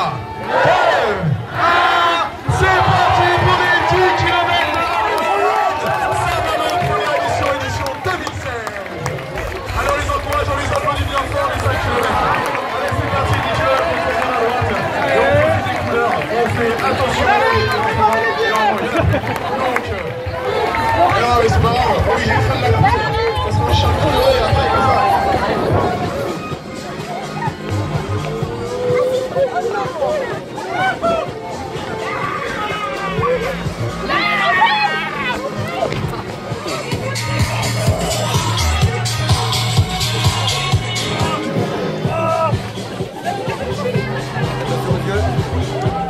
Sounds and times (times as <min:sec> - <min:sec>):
Music: 0:00.0 - 0:46.1
Run: 0:00.0 - 0:46.1.